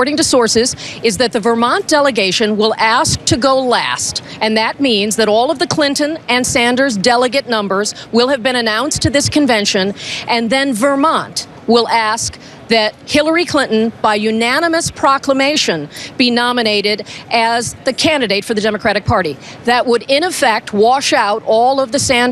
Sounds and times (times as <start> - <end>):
Speech: 0.0 - 22.3.